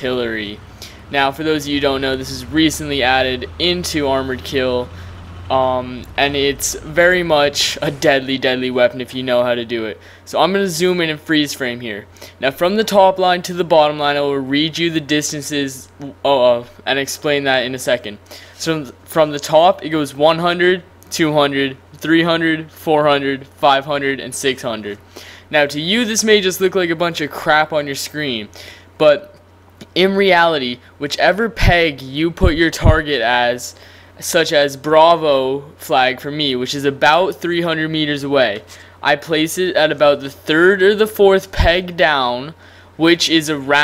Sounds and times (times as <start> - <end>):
Speech: 0.0 - 43.8.